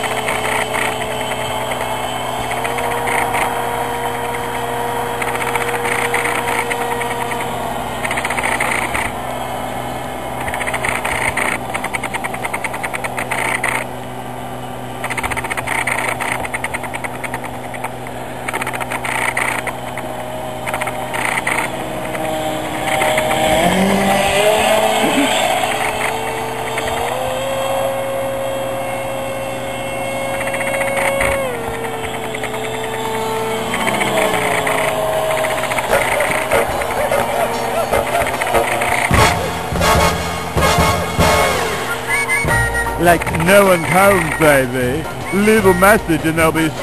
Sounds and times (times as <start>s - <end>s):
Aircraft: 0.0s - 42.6s.